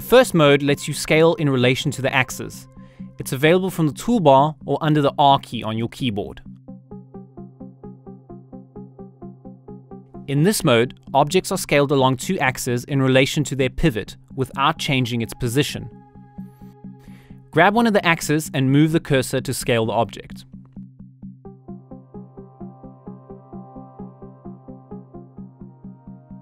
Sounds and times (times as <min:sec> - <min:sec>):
Speech: 0:00.0 - 0:06.4, 0:10.3 - 0:15.9, 0:17.6 - 0:20.4
Music: 0:00.0 - 0:26.4.